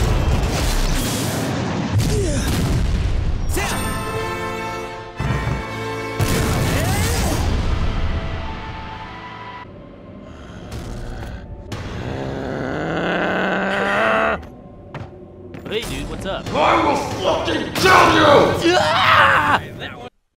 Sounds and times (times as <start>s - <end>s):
Speech: 15.7s - 20.2s.